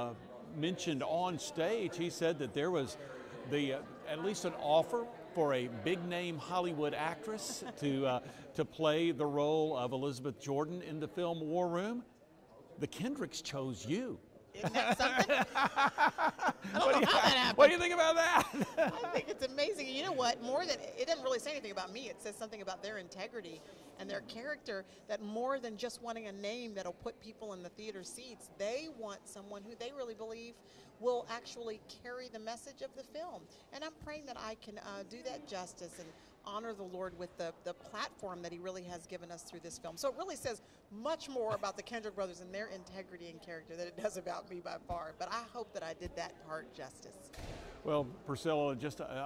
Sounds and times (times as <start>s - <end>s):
Speech: 14.6s - 15.4s, 16.6s - 24.4s, 47.9s - 49.2s.